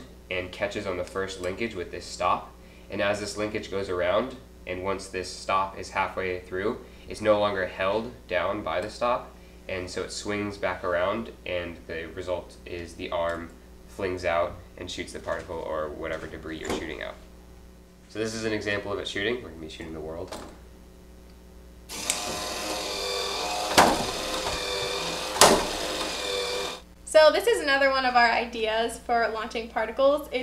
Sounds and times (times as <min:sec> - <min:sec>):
Gears: 0:21.9 - 0:26.8.